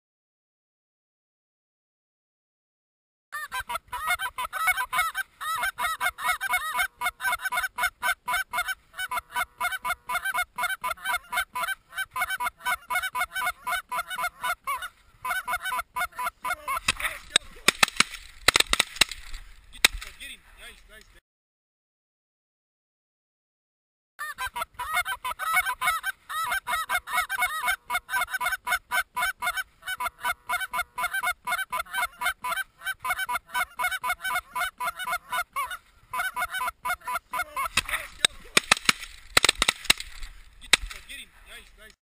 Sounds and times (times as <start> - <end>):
Honk: 3.6 - 17.4, 24.5 - 38.4
Speech: 20.1 - 21.2, 37.8 - 38.6, 41.0 - 42.0.